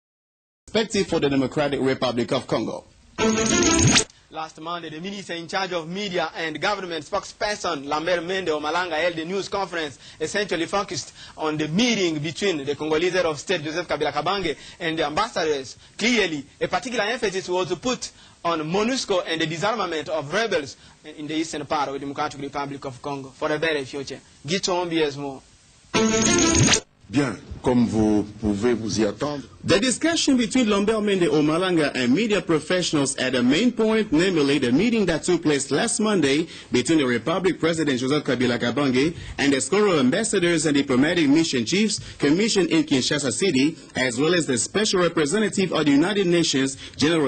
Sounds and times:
Speech: 0:00.7 - 0:02.9, 0:04.3 - 0:25.4, 0:27.1 - 0:47.2
Music: 0:03.2 - 0:04.1, 0:26.0 - 0:26.8.

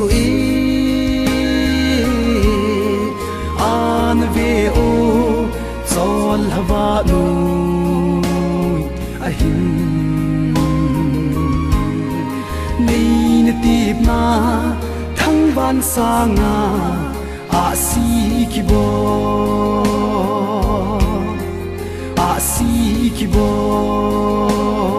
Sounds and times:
Singing: 0:00.0 - 0:21.4, 0:22.2 - 0:24.9
Music: 0:00.0 - 0:24.9.

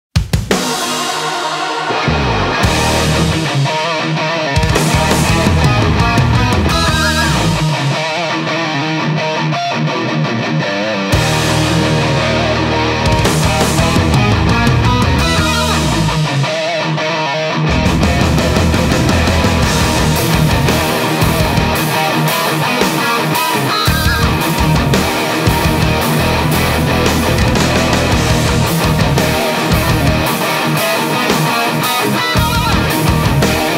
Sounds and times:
Progressive rock: 0:00.2 - 0:33.7.

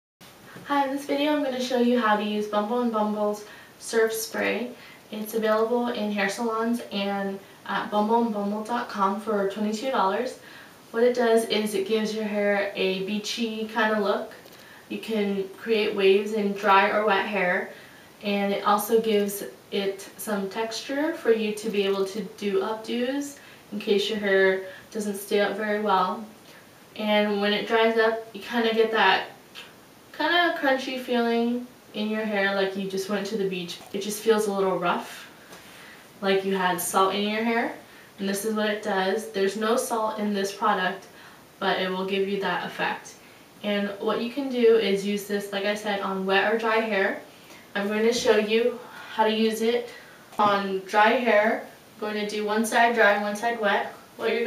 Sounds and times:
Speech: 0:00.6 - 0:26.4, 0:27.0 - 0:35.3, 0:36.2 - 0:54.4.

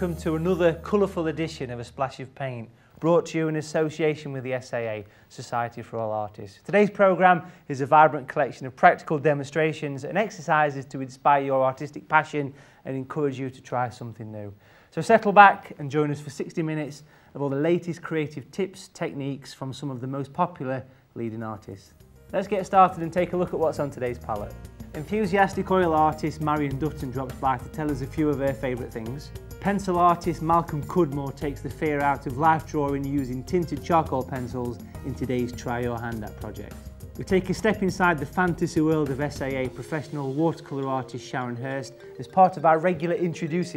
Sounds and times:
Music: 0:00.0 - 0:05.0, 0:21.3 - 0:43.7
Speech: 0:00.0 - 0:43.7.

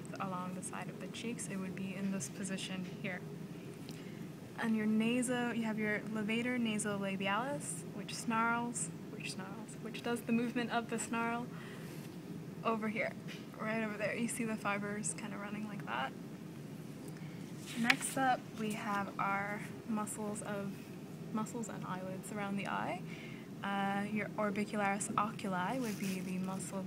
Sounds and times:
Speech: 0:00.0 - 0:03.2, 0:04.6 - 0:11.5, 0:12.7 - 0:16.2, 0:17.7 - 0:20.8, 0:21.4 - 0:26.8.

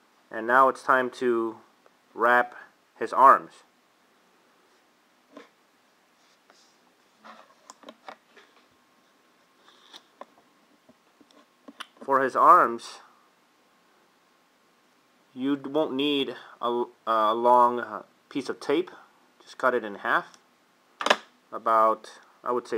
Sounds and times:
Inside, small room: 0:00.0 - 0:22.7
Speech: 0:00.3 - 0:03.7, 0:12.0 - 0:13.2, 0:15.4 - 0:20.4, 0:21.5 - 0:22.7.

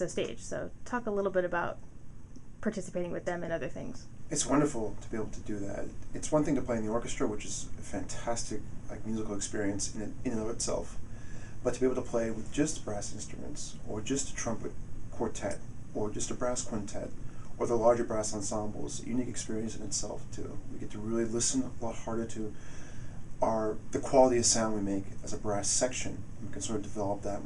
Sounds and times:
Speech: 0:00.0 - 0:01.8, 0:02.6 - 0:11.0, 0:11.7 - 0:22.5, 0:23.4 - 0:27.4.

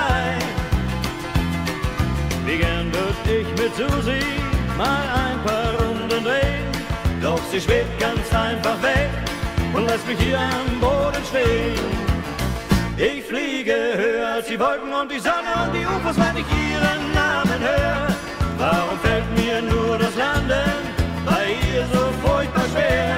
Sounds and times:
Music: 0:00.0 - 0:23.1.

